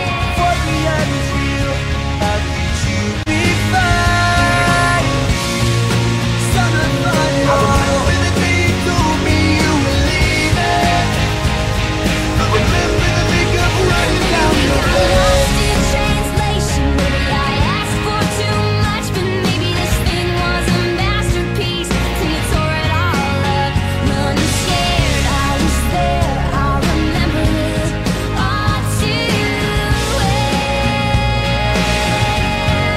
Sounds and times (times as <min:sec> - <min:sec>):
Grunge: 0:00.0 - 0:32.9.